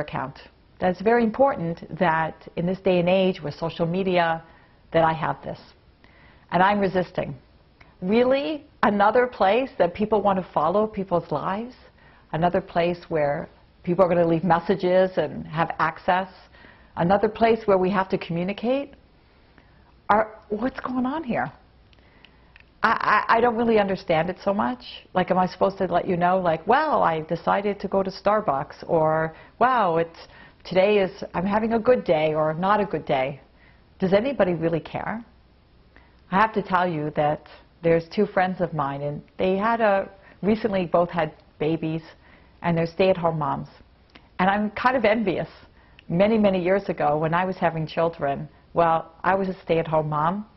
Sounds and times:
Speech: 0:00.0 - 0:05.8, 0:06.5 - 0:07.4, 0:08.0 - 0:19.0, 0:20.1 - 0:21.6, 0:22.8 - 0:33.4, 0:34.0 - 0:35.3, 0:36.3 - 0:43.8, 0:44.4 - 0:50.5.

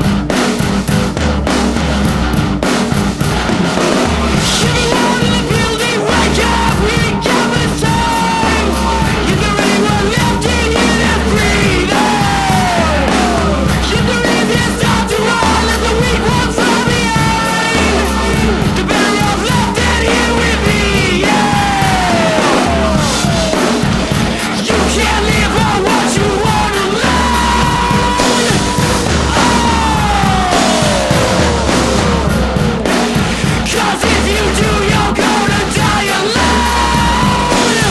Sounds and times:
Music: 0:00.0 - 0:37.9.

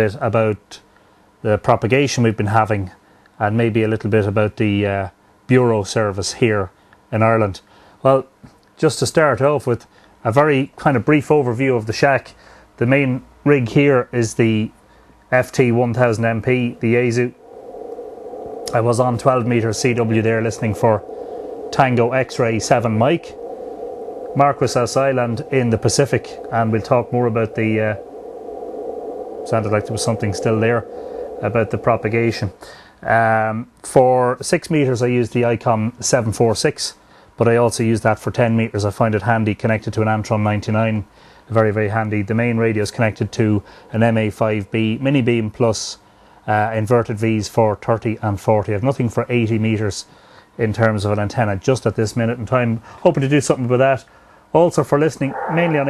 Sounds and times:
Speech: 0:00.0 - 0:00.8, 0:01.4 - 0:17.4, 0:18.7 - 0:21.0, 0:21.7 - 0:23.4, 0:24.4 - 0:28.0, 0:29.5 - 0:55.9.

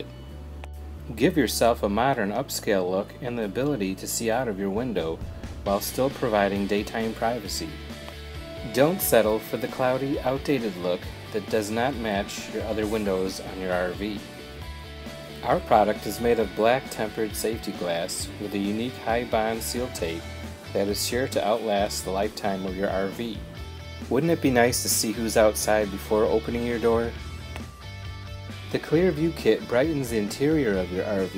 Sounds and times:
Music: 0:00.0 - 0:31.3
Speech: 0:01.1 - 0:07.8, 0:08.6 - 0:14.2, 0:15.4 - 0:23.4, 0:24.1 - 0:27.2, 0:28.7 - 0:31.3.

